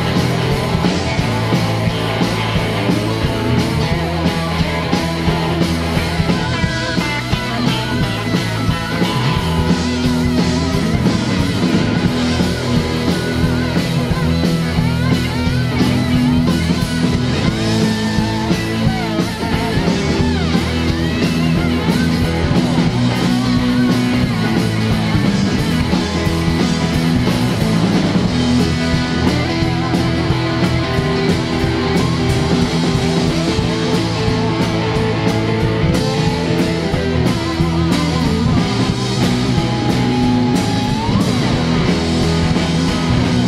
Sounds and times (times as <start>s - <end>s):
Psychedelic rock: 0.0s - 43.4s
Punk rock: 0.0s - 43.4s.